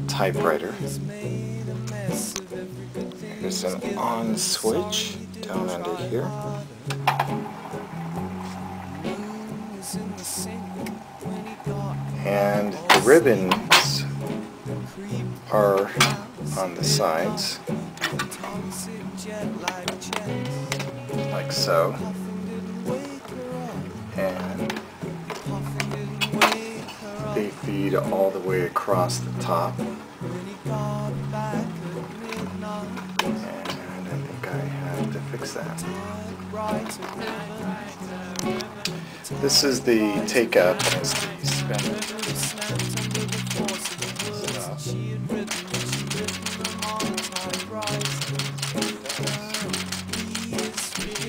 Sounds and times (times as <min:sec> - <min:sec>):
Speech: 0:00.0 - 0:01.0, 0:03.4 - 0:06.5, 0:12.2 - 0:14.2, 0:15.5 - 0:17.6, 0:21.3 - 0:22.0, 0:24.2 - 0:24.7, 0:27.2 - 0:29.8, 0:33.4 - 0:36.1, 0:39.3 - 0:42.4, 0:44.2 - 0:45.0
Music: 0:00.0 - 0:51.2.